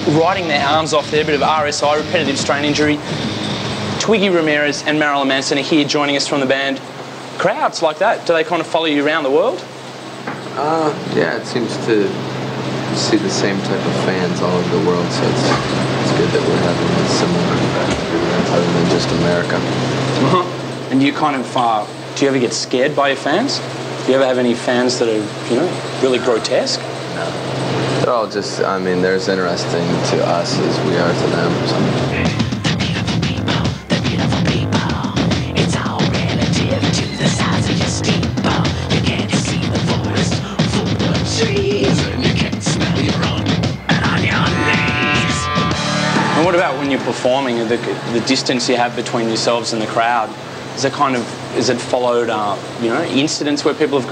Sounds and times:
Speech: 0.0s - 3.0s, 7.4s - 9.7s, 10.6s - 12.2s, 12.9s - 27.4s, 28.0s - 45.2s, 46.4s - 54.1s.

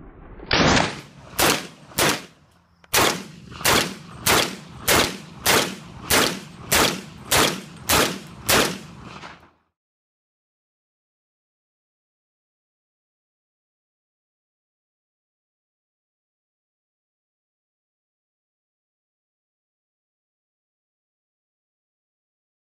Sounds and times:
Silence: 0.0s - 9.8s.

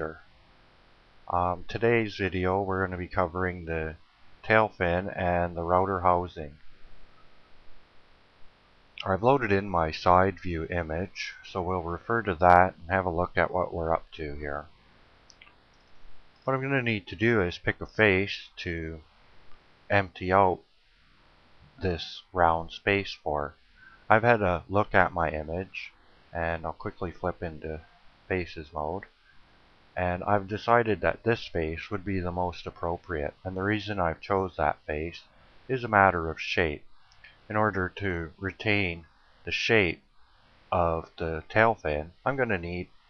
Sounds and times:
Speech: 0.0s - 0.2s, 1.3s - 6.6s, 9.0s - 14.7s, 16.5s - 19.0s, 19.9s - 20.6s, 21.8s - 29.1s, 30.0s - 36.9s, 37.5s - 40.0s, 40.8s - 42.9s.

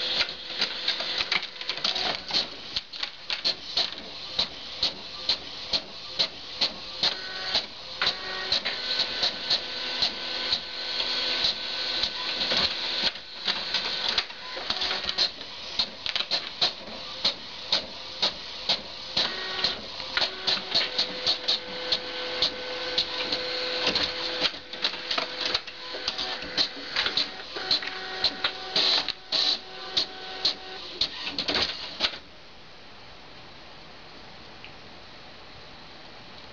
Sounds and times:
Printer: 0.0s - 32.4s.

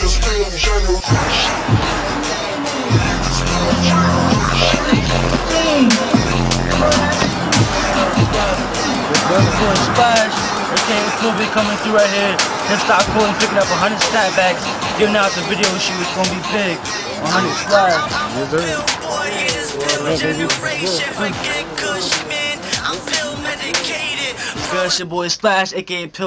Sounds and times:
Music: 0.0s - 25.0s
Speech: 19.6s - 23.2s.

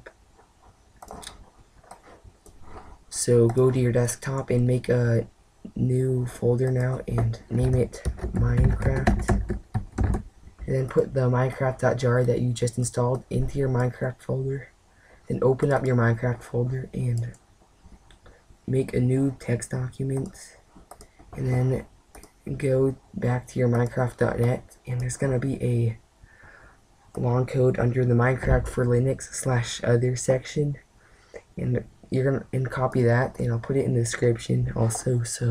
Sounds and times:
Speech: 3.1s - 9.4s, 10.6s - 14.7s, 15.3s - 17.4s, 18.7s - 20.6s, 21.4s - 26.0s, 27.1s - 30.8s, 31.4s - 35.5s
Computer keyboard: 6.6s - 10.2s.

